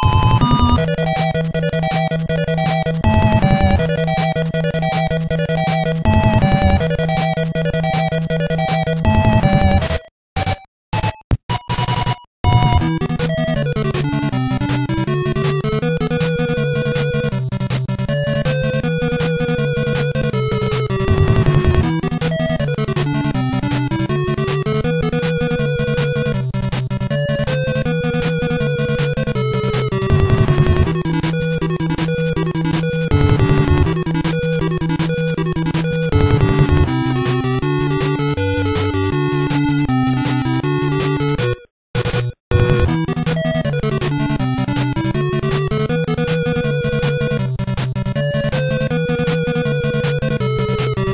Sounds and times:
Music: 0:00.0 - 0:51.1.

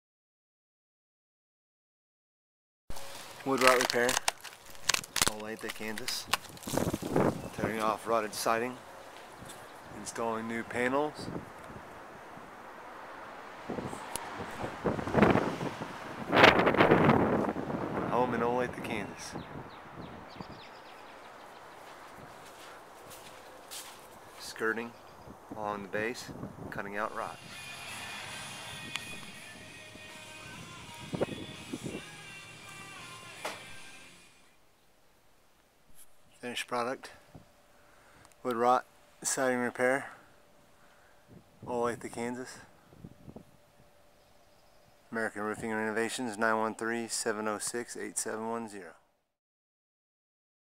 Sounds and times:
Speech: 0:03.4 - 0:04.2, 0:05.2 - 0:06.3, 0:07.5 - 0:08.8, 0:09.9 - 0:11.3, 0:18.1 - 0:19.4, 0:24.4 - 0:25.0, 0:25.6 - 0:27.4, 0:36.4 - 0:37.2, 0:38.4 - 0:40.2, 0:41.7 - 0:42.7, 0:45.1 - 0:49.0
Music: 0:27.4 - 0:34.5.

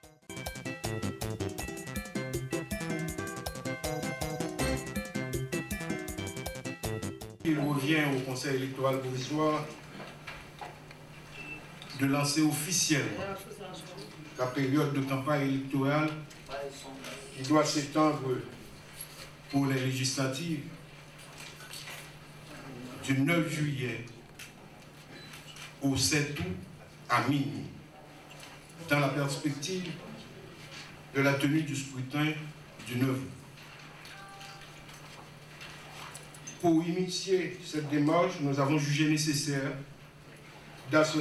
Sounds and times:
Music: 0:00.0 - 0:07.5
Speech: 0:07.5 - 0:09.8, 0:12.0 - 0:18.6, 0:19.5 - 0:20.8, 0:22.5 - 0:24.2, 0:25.8 - 0:27.9, 0:28.8 - 0:33.4, 0:36.6 - 0:39.8, 0:40.9 - 0:41.2.

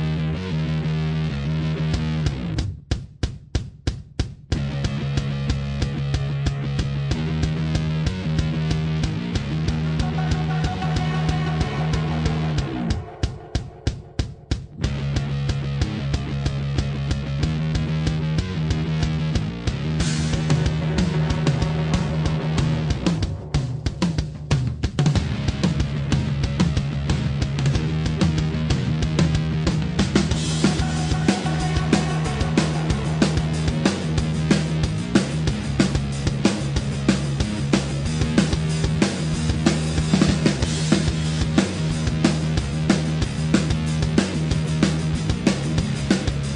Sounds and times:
Theme music: 0:20.0 - 0:25.7, 0:30.3 - 0:35.7.

